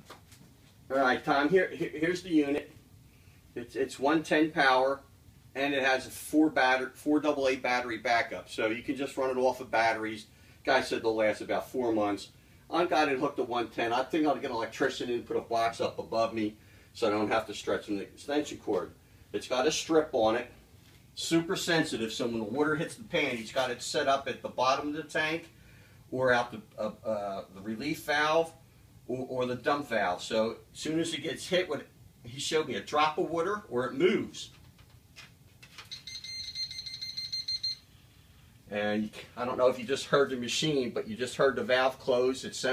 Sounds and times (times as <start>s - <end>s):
Speech: 0.9s - 2.7s, 3.6s - 20.5s, 21.2s - 25.5s, 26.1s - 34.6s, 38.7s - 42.7s.